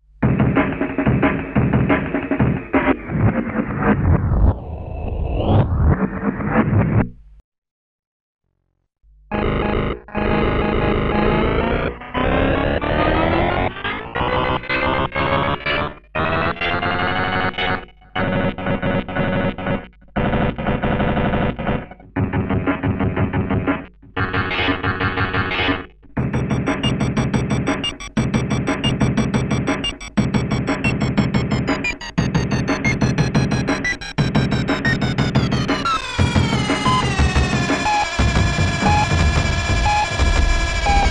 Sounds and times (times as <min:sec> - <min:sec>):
Sampler: 0:26.2 - 0:41.1.